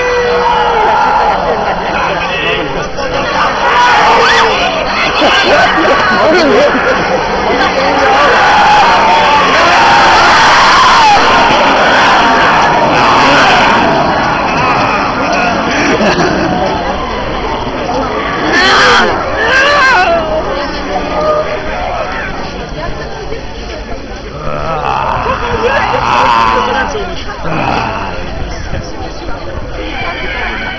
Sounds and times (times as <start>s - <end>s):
Speech: 16.1s - 30.7s.